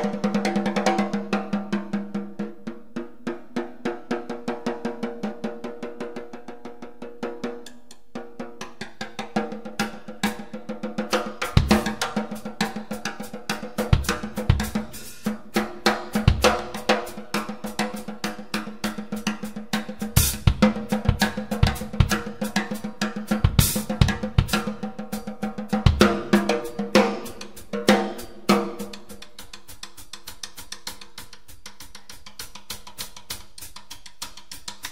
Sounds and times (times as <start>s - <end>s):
Music: 0.0s - 34.9s.